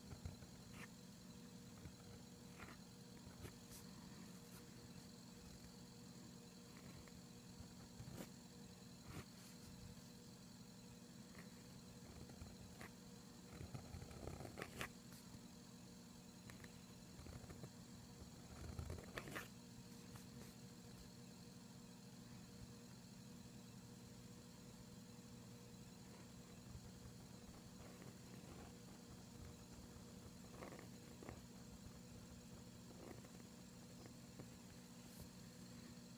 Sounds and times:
Writing: 0.0s - 10.2s, 11.2s - 15.5s, 16.4s - 21.2s, 25.8s - 36.1s.

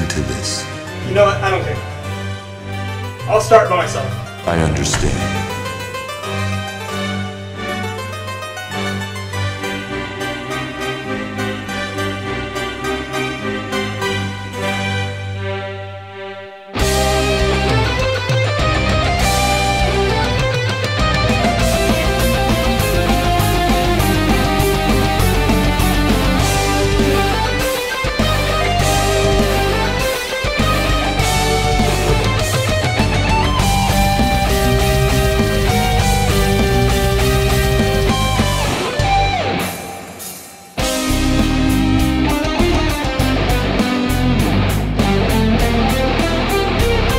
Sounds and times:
Music: 0.0s - 47.1s.

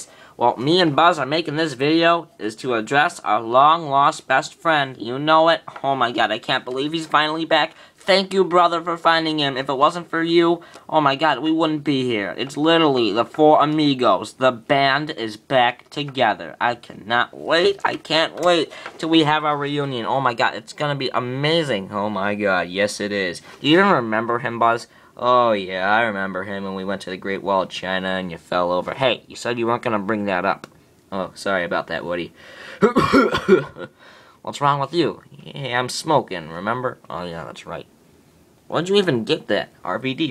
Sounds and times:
Speech: 0.0s - 33.0s, 33.6s - 37.9s, 38.7s - 40.3s.

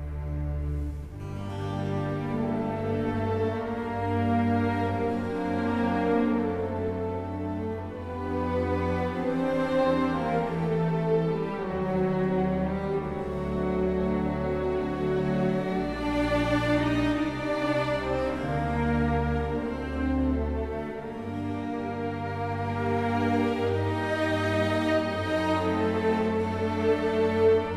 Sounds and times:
Sad music: 0.0s - 27.7s.

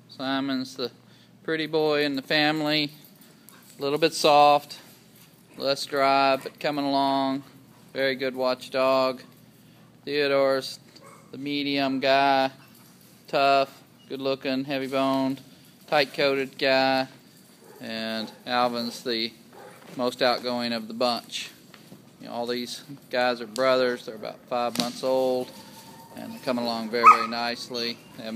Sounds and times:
Speech: 0.1s - 3.0s, 3.8s - 4.9s, 5.6s - 9.3s, 10.1s - 10.8s, 11.4s - 12.6s, 13.3s - 17.2s, 17.8s - 19.4s, 20.0s - 21.6s, 22.2s - 25.6s, 26.2s - 28.3s.

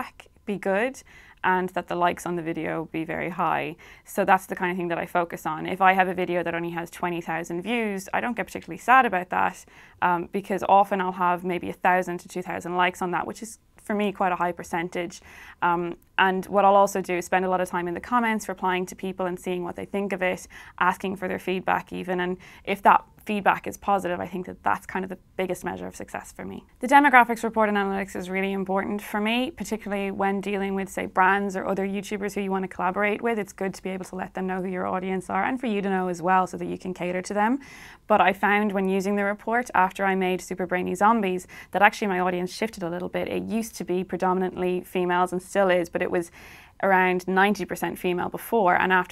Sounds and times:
Speech: 0.0s - 49.1s.

